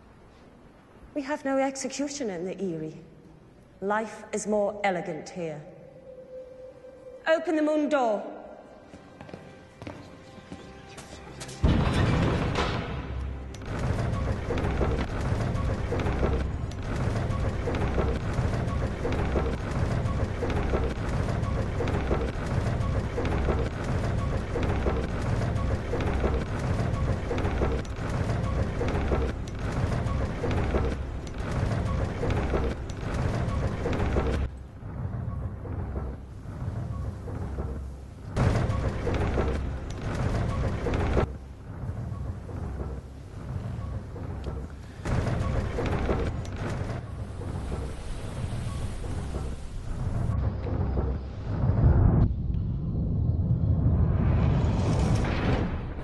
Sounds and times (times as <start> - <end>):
Music: 5.8 - 53.9.